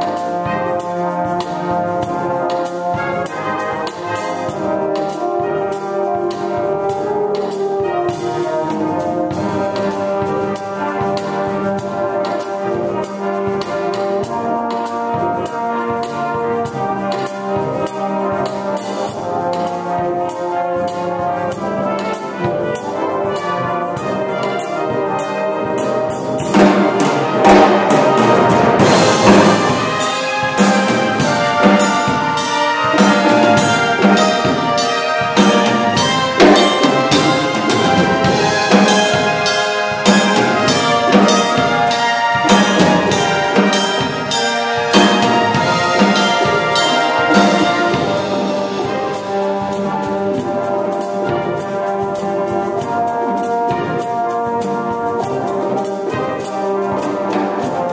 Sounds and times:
Brass instrument: 0.0s - 57.9s
Orchestra: 0.0s - 57.9s.

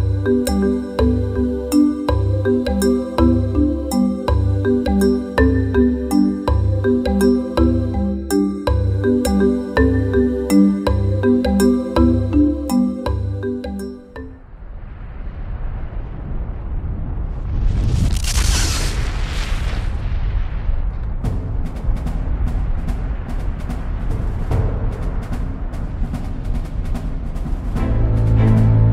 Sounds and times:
Music: 0.0s - 14.5s, 21.1s - 28.9s
Explosion: 14.4s - 27.8s.

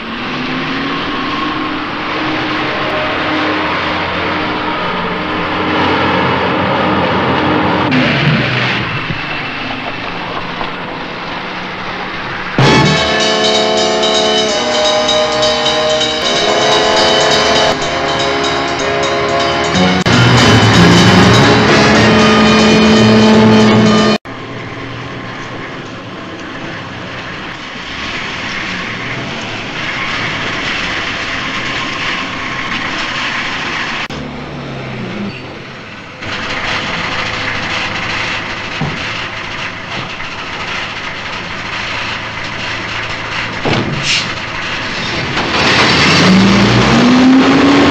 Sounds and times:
Truck: 0.0s - 17.0s, 17.6s - 47.9s.

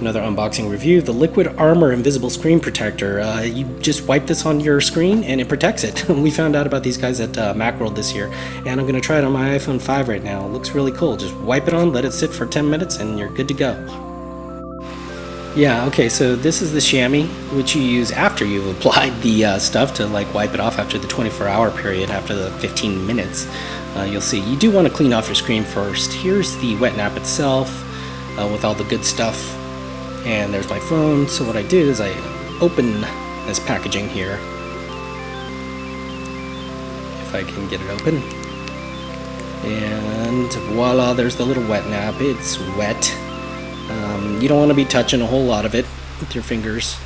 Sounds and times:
Speech: 0.0s - 14.0s, 15.6s - 29.6s, 30.2s - 34.5s, 37.2s - 38.3s, 39.6s - 43.2s, 43.9s - 47.0s
Music: 0.0s - 47.0s.

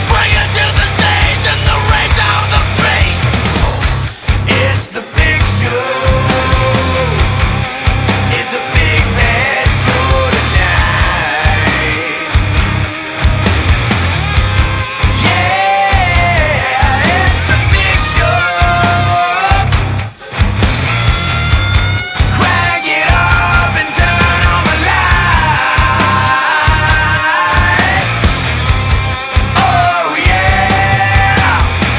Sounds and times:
Music: 0.0s - 31.9s.

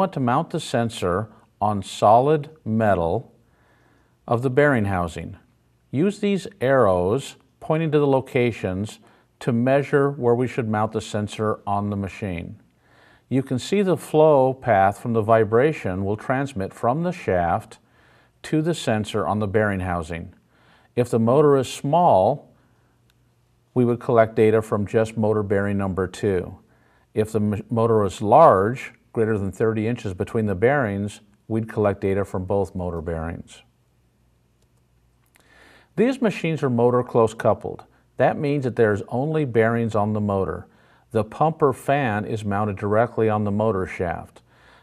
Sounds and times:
Speech: 0.0s - 3.4s, 4.3s - 12.6s, 13.3s - 17.8s, 18.4s - 20.4s, 21.0s - 22.6s, 23.8s - 33.7s, 36.0s - 44.5s.

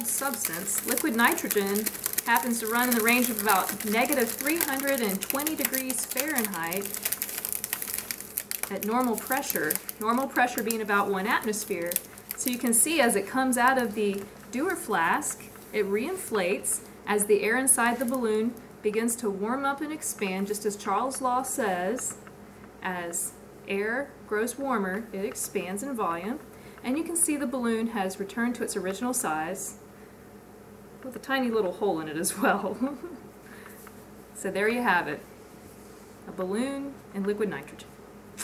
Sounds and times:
Speech: 0.0s - 7.0s, 8.7s - 22.2s, 22.8s - 29.8s, 31.0s - 33.0s, 34.4s - 35.2s, 36.3s - 38.4s.

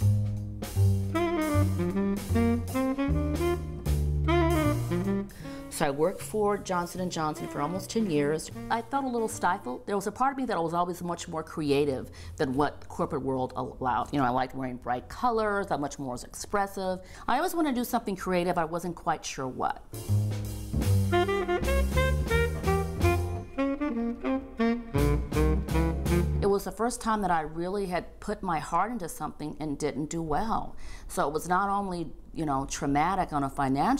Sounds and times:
Saxophone: 1.0s - 5.9s, 7.3s - 9.0s, 20.8s - 26.5s.

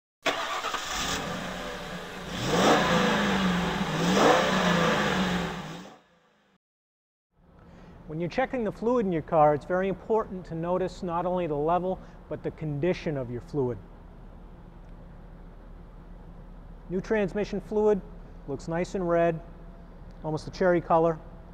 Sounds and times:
Speech: 8.1s - 13.8s, 16.9s - 19.5s, 20.2s - 21.2s.

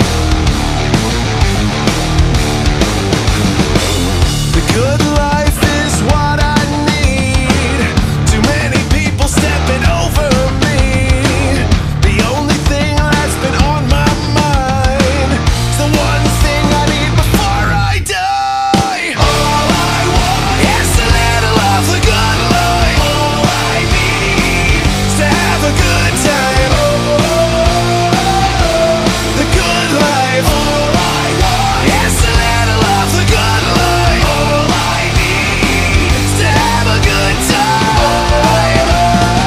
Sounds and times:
Music: 0.0s - 39.4s.

